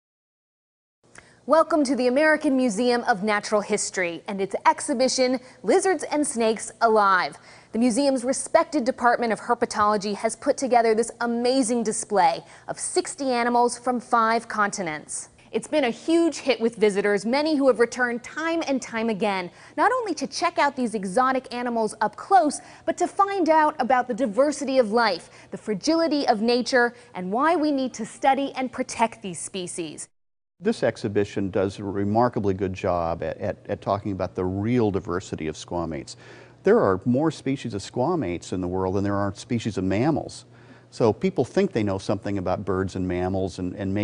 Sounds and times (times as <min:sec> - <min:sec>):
Speech: 0:01.5 - 0:40.4, 0:41.0 - 0:44.0.